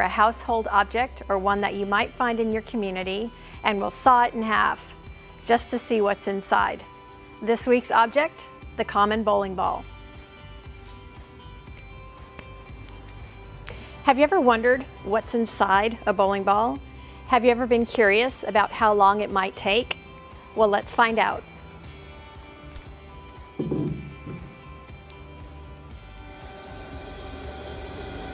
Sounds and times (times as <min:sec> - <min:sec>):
Music: 0:00.0 - 0:28.3.